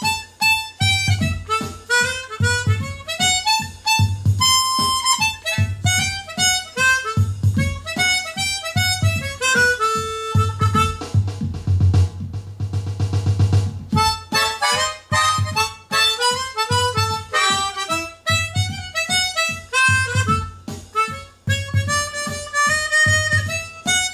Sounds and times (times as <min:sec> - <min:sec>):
Harmonica: 0:00.0 - 0:11.2, 0:14.0 - 0:24.1
Wind instrument, woodwind instrument: 0:00.0 - 0:11.2, 0:14.0 - 0:24.1.